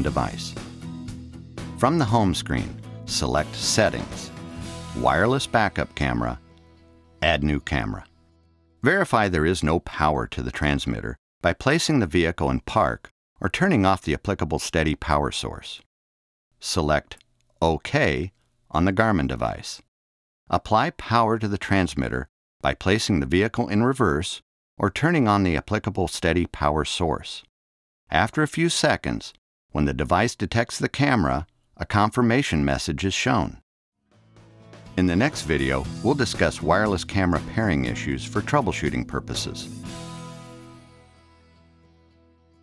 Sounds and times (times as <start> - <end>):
Speech: 0.0 - 0.6, 1.8 - 4.4, 5.0 - 6.4, 7.2 - 8.1, 8.8 - 15.9, 16.6 - 19.9, 20.5 - 27.5, 28.1 - 33.6, 35.0 - 39.8.